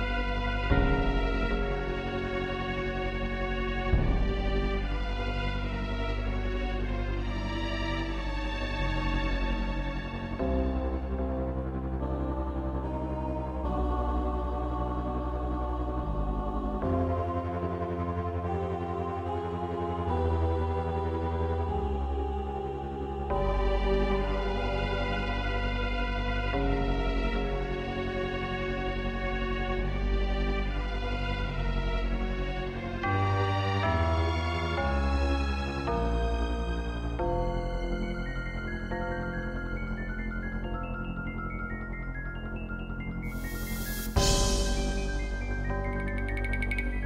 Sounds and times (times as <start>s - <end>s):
Music: 0.0s - 47.0s.